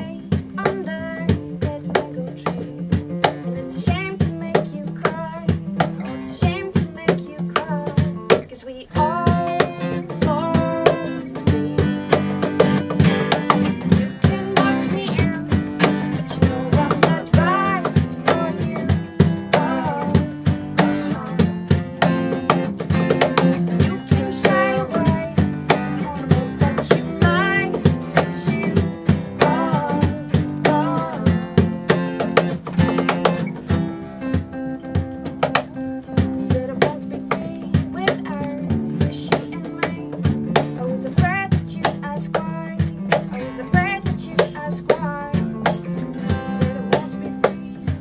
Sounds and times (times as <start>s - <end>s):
Music: 0.0s - 48.0s.